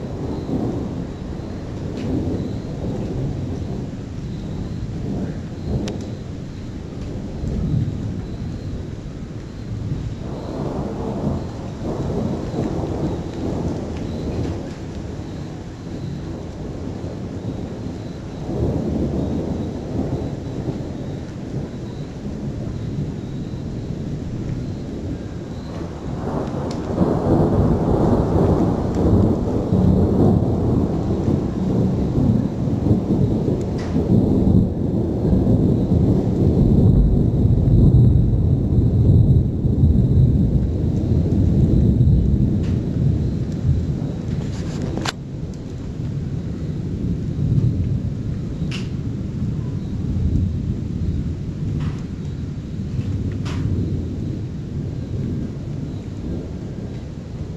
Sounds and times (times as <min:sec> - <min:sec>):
Thunder: 0:00.0 - 0:57.5.